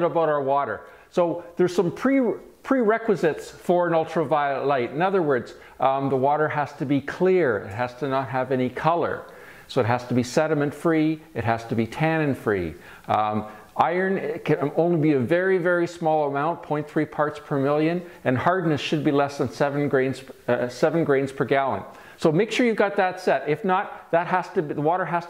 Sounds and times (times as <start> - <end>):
Speech: 0.0 - 25.2.